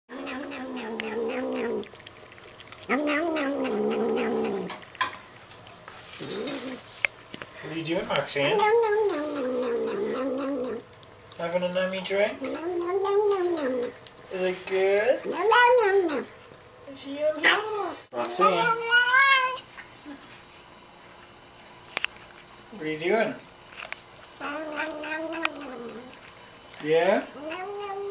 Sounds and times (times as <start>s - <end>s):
Cat: 0.1s - 4.8s, 6.2s - 6.9s, 8.2s - 11.0s, 12.4s - 14.2s, 15.2s - 16.3s, 17.4s - 19.7s, 23.8s - 26.3s, 27.2s - 28.1s
Speech: 7.6s - 8.7s, 11.4s - 12.4s, 14.3s - 15.3s, 16.9s - 18.9s, 22.7s - 23.4s, 26.8s - 27.3s.